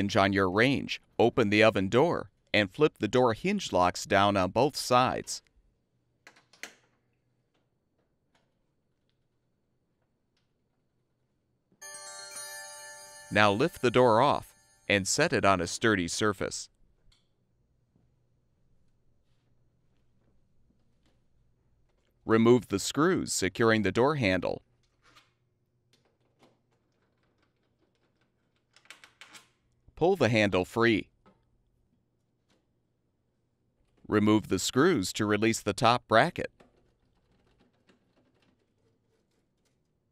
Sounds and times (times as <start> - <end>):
Speech: 0.0 - 5.5, 13.3 - 16.7, 22.3 - 24.6, 30.0 - 31.1, 34.1 - 36.5.